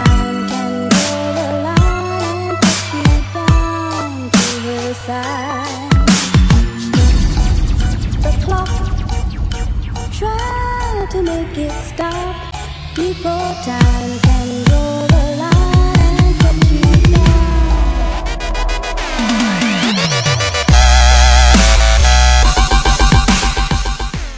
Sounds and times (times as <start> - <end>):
Dubstep: 0.0 - 24.3.